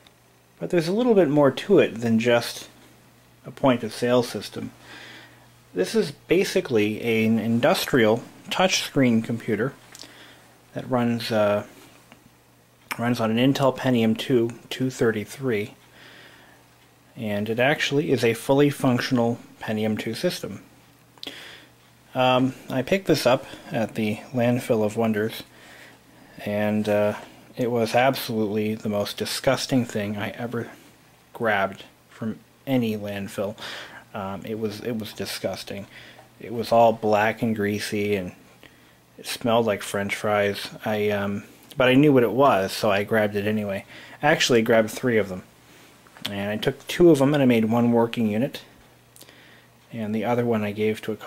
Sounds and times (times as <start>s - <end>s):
Speech: 0.6s - 2.8s, 3.4s - 4.8s, 5.8s - 9.8s, 10.7s - 11.8s, 12.9s - 15.8s, 17.2s - 20.7s, 22.1s - 25.5s, 26.4s - 38.4s, 39.2s - 45.5s, 46.2s - 48.8s, 49.9s - 51.2s.